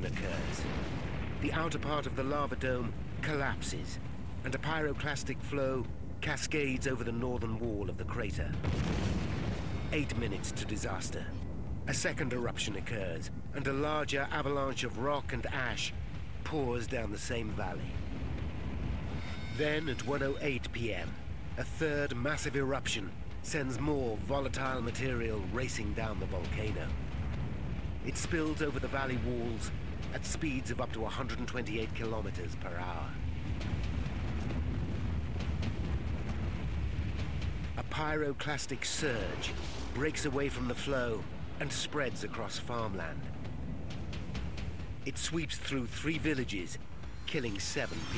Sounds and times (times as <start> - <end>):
Speech: 0.0 - 0.7, 1.4 - 8.6, 9.9 - 17.9, 19.6 - 26.9, 28.1 - 33.2, 37.8 - 43.3, 45.1 - 48.1.